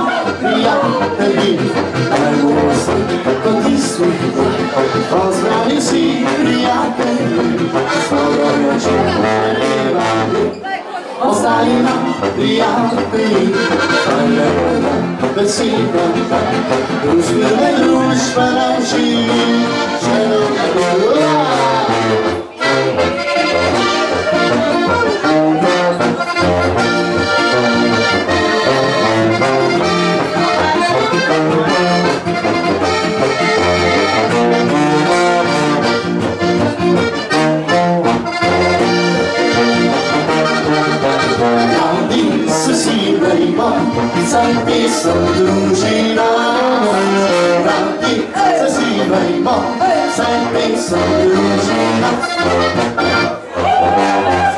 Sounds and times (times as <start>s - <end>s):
Accordion: 0.0s - 54.5s.